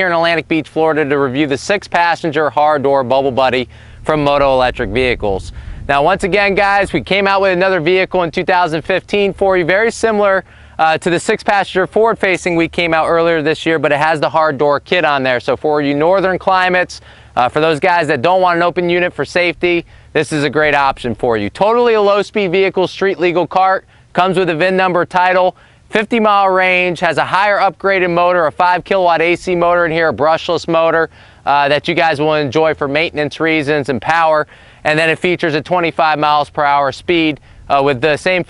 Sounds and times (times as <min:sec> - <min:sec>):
Speech: 0:00.0 - 0:38.4.